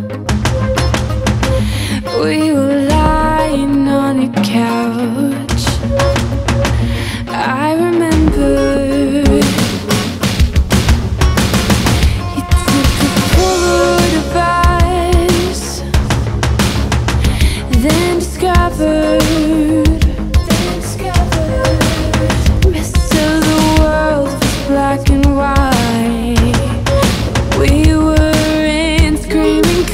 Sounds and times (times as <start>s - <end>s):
Soundtrack music: 0.0s - 29.9s.